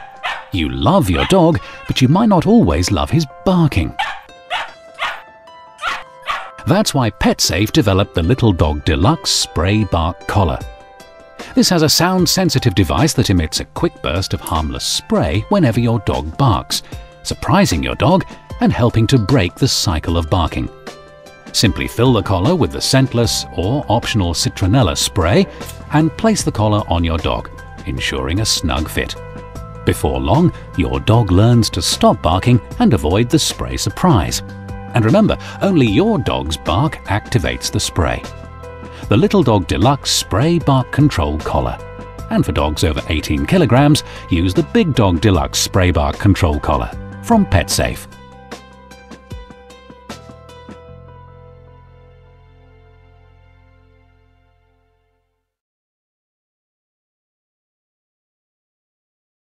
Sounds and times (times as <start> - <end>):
Music: 0.0 - 55.6
Speech: 0.6 - 4.0, 6.6 - 10.7, 11.5 - 20.7, 21.6 - 29.2, 29.9 - 34.4, 35.0 - 38.3, 39.0 - 48.1.